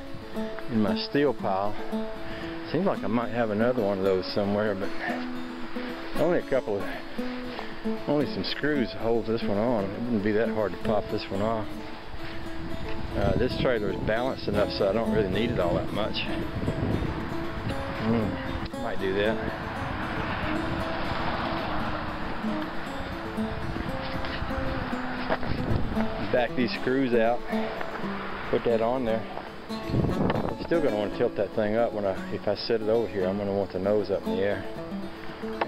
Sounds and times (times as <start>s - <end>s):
Music: 0.0s - 35.6s
Outside, rural or natural: 0.0s - 35.6s
Speech: 0.7s - 1.8s, 2.7s - 5.2s, 6.2s - 7.0s, 8.1s - 11.7s, 13.2s - 16.3s, 18.0s - 19.4s, 26.2s - 27.4s, 28.5s - 29.3s, 30.6s - 34.7s
Vehicle: 1.8s - 35.6s.